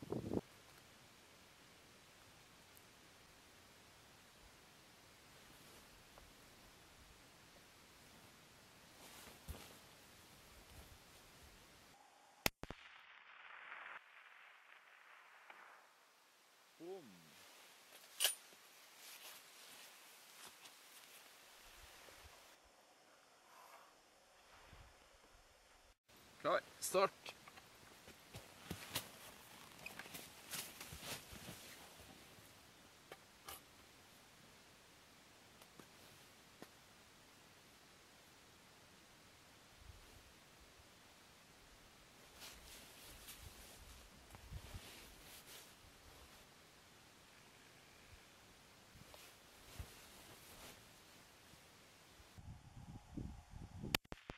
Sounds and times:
Silence: 0.1 - 26.8, 31.4 - 54.3.

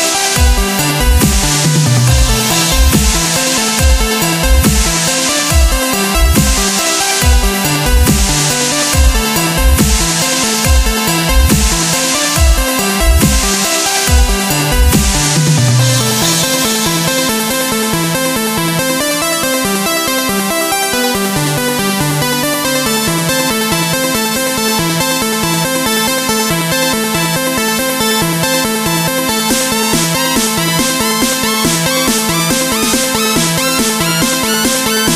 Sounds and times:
Dubstep: 0.0 - 35.1.

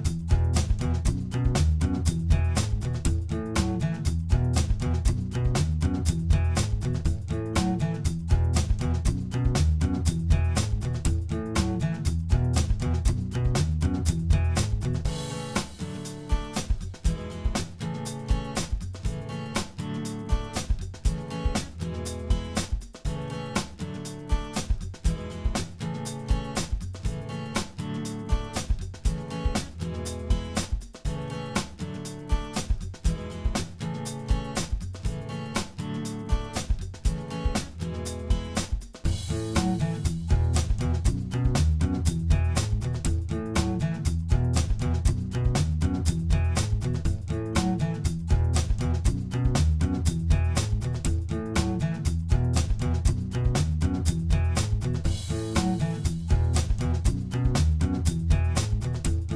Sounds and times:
Music: 0.0 - 59.3.

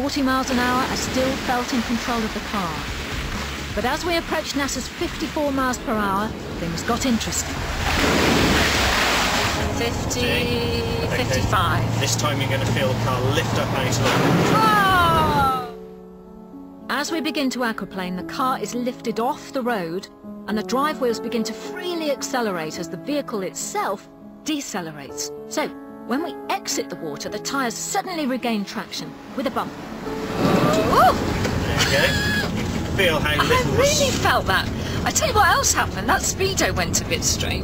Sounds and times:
Music: 0.0 - 37.6.

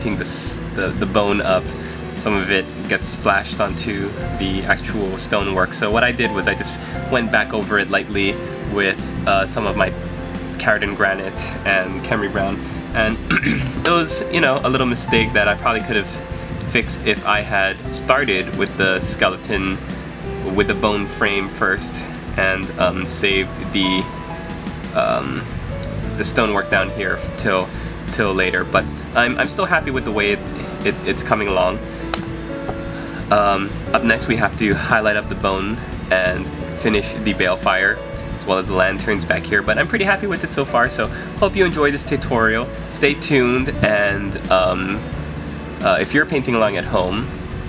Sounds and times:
Speech: 0.0 - 10.0, 10.6 - 19.8, 20.4 - 24.1, 25.0 - 25.5, 26.2 - 31.8, 33.3 - 45.0, 45.8 - 47.3
Music: 0.0 - 47.6.

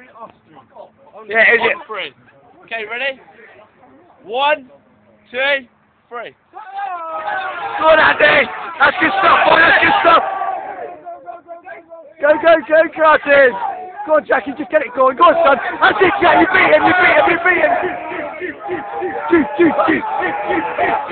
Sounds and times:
Speech: 10.9 - 20.1.

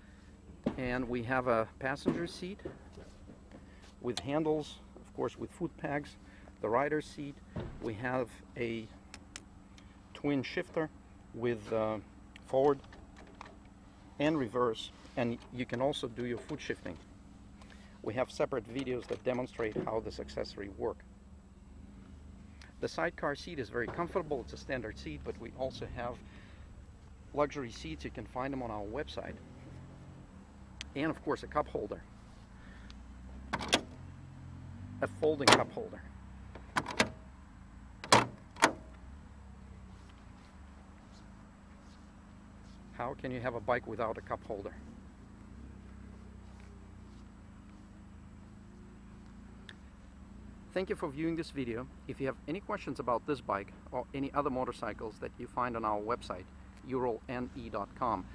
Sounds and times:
Vehicle: 0.0 - 58.3
Speech: 0.7 - 2.8, 4.0 - 9.0, 10.1 - 12.8, 14.2 - 17.0, 18.0 - 21.0, 22.7 - 26.2, 27.3 - 29.4, 30.9 - 32.1, 35.0 - 36.1, 42.9 - 44.9, 50.7 - 58.3.

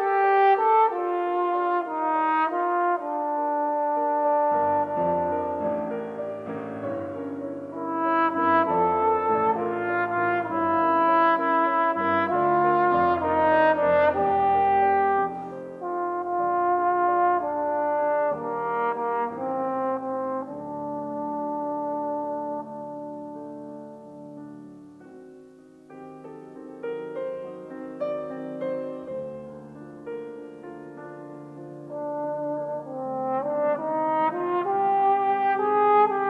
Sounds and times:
Trumpet: 0.0 - 24.8, 31.0 - 36.3.

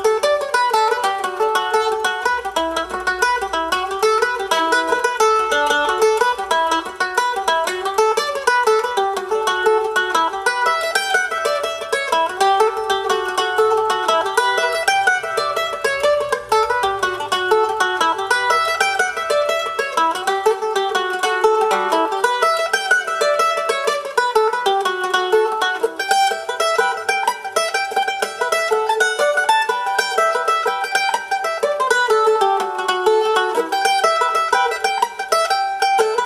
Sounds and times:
Pizzicato: 0.0 - 36.2.

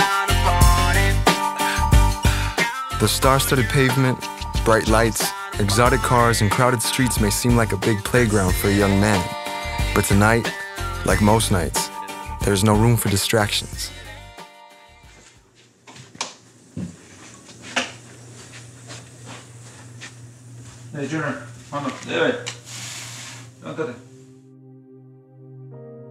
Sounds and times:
Music: 0.0 - 15.4, 23.5 - 26.1
Speech: 3.0 - 9.4, 10.0 - 13.9, 20.9 - 22.5, 23.6 - 24.0.

